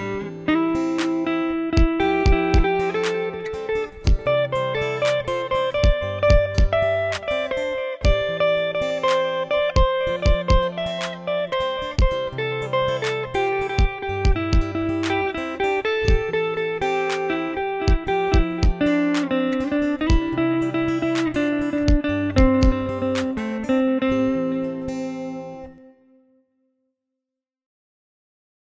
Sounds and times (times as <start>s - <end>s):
Guitar: 0.0s - 26.6s
Inside, small room: 0.0s - 27.0s.